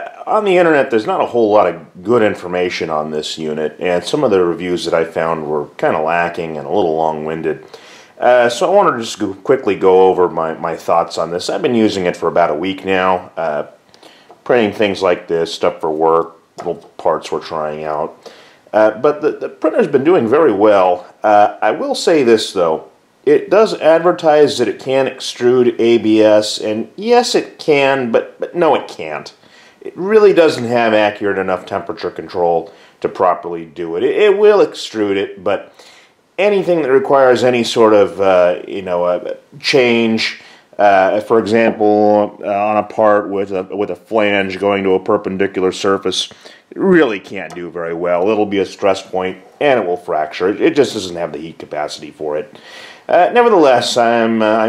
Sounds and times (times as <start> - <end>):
Speech: 0.0 - 13.8, 14.4 - 35.8, 36.4 - 54.6.